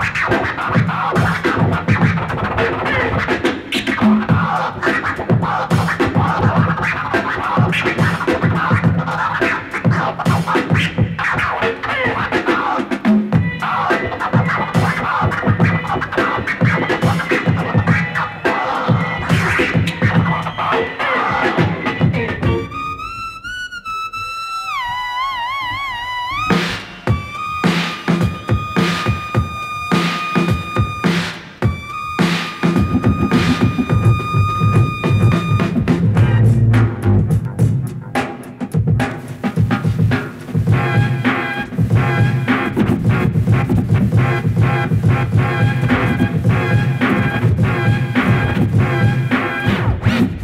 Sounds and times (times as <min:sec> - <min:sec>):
Electronic music: 0:00.0 - 0:50.4
Scratching (performance technique): 0:00.0 - 0:50.4.